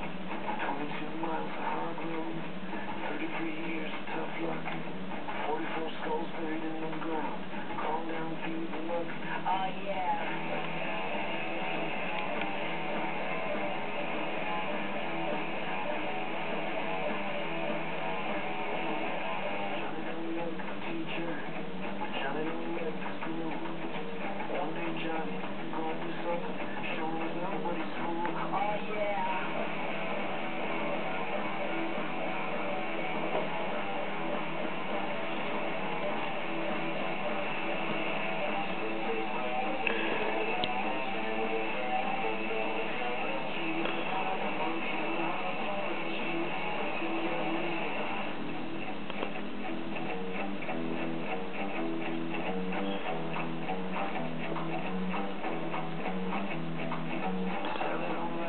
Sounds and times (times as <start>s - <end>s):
Music: 0.0s - 58.4s.